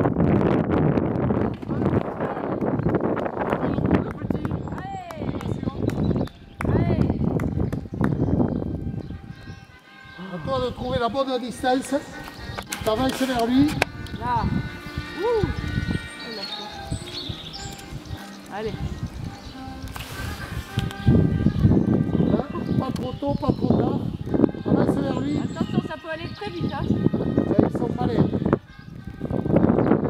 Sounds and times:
Music: 1.2 - 30.0.

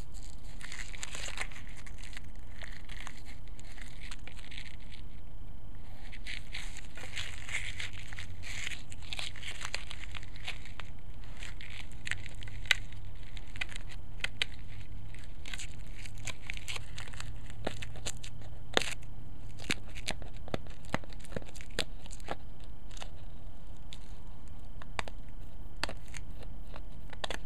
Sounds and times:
Crackle: 0.0 - 27.4.

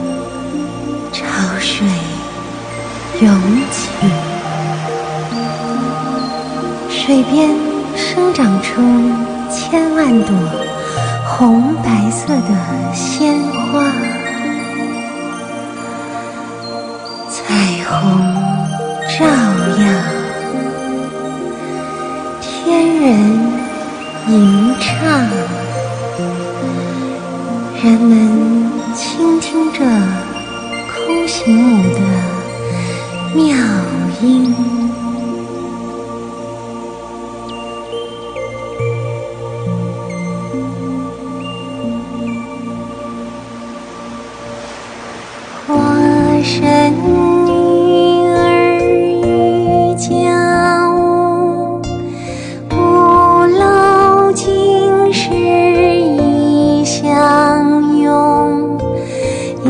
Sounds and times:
Music: 0.0 - 59.7.

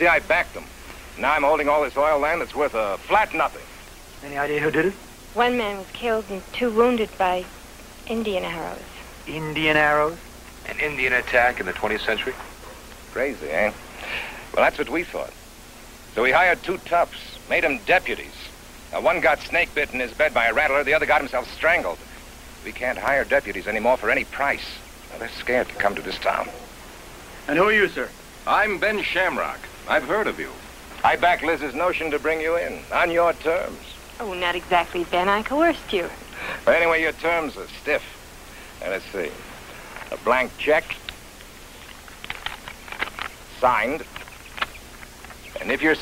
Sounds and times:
Speech: 0.0 - 7.5, 8.1 - 12.4, 13.1 - 13.8, 14.6 - 15.4, 16.2 - 22.0, 22.6 - 26.6, 27.5 - 38.2, 38.8 - 39.4, 40.1 - 41.0, 43.5 - 44.1, 45.6 - 46.0.

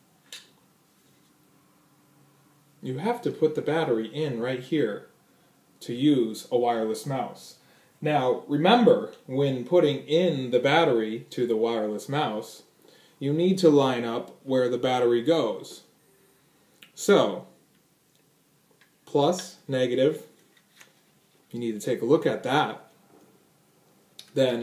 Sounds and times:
Speech: 2.8 - 5.1, 5.8 - 15.9, 16.9 - 17.5, 19.1 - 20.3, 21.5 - 22.9, 24.2 - 24.6.

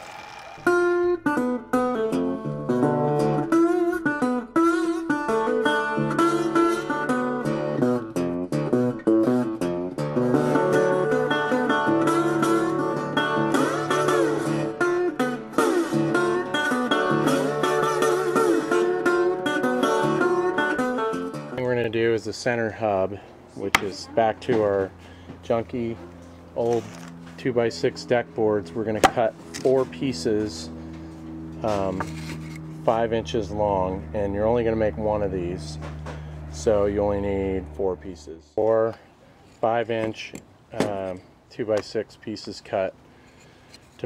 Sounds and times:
Speech: 21.6 - 24.9, 25.5 - 26.0, 26.6 - 30.7, 31.6 - 32.1, 32.9 - 35.8, 36.6 - 39.0, 39.6 - 43.0.

